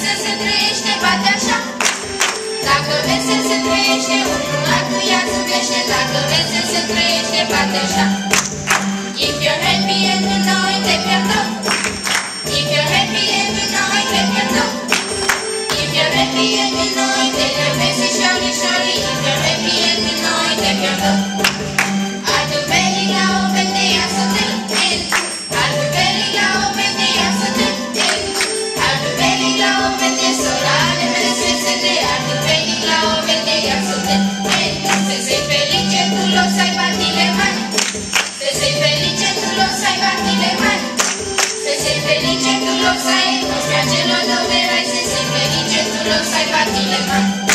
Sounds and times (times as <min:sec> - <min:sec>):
Music: 0:00.0 - 0:47.5.